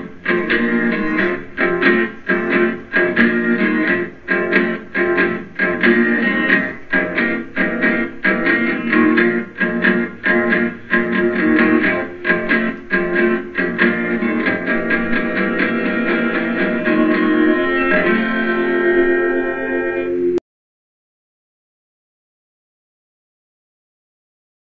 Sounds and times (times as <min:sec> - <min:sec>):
Guitar: 0:00.0 - 0:20.4.